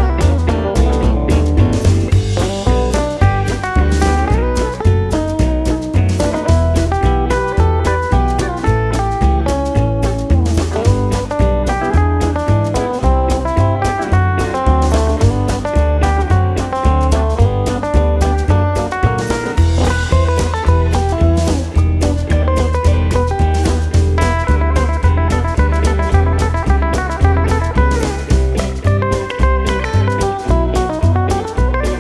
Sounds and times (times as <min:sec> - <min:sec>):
Steel guitar, slide guitar: 0:00.0 - 0:32.0.